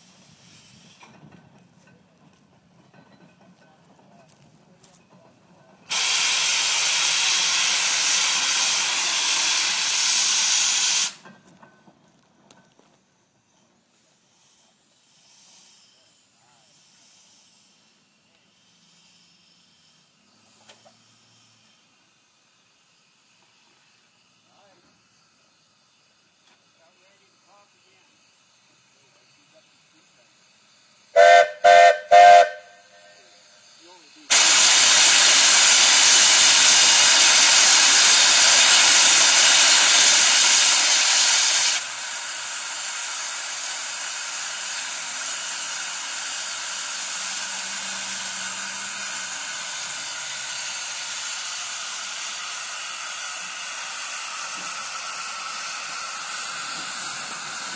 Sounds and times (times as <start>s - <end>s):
Hiss: 0.0s - 1.4s, 5.8s - 11.4s, 12.9s - 57.7s.